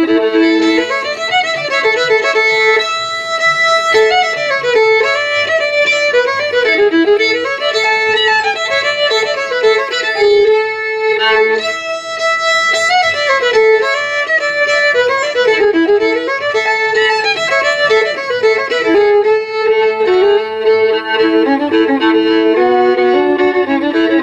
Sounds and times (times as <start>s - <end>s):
Violin, fiddle: 0.0s - 24.2s.